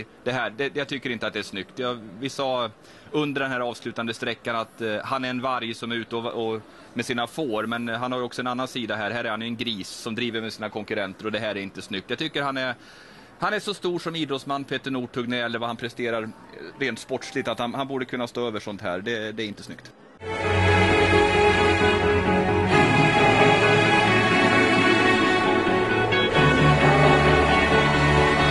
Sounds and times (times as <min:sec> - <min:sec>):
Speech: 0:00.0 - 0:12.8, 0:13.4 - 0:20.0.